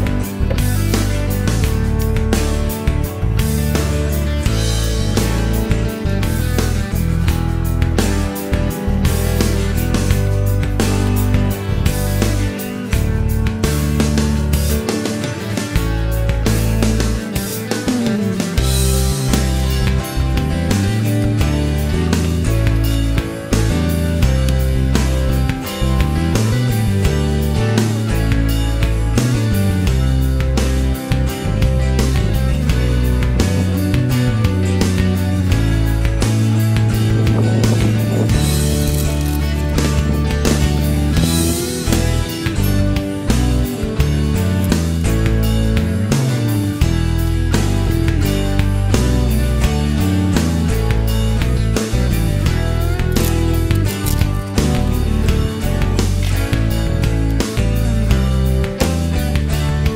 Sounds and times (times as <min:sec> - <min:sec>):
Music: 0:00.0 - 0:59.9.